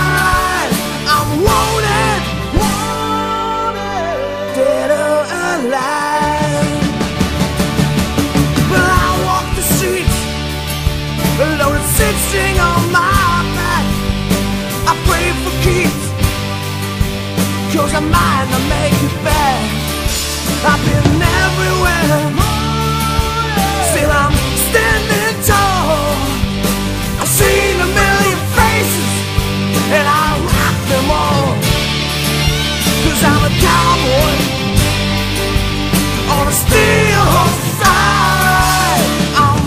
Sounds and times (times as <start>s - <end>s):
Independent music: 0.0s - 39.6s.